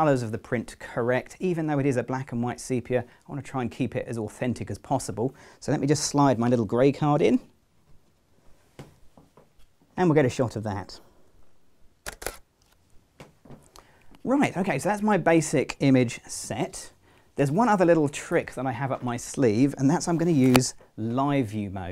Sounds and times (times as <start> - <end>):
Speech: 0.0 - 7.6, 10.0 - 11.1, 14.2 - 21.9
Inside, small room: 0.0 - 21.9.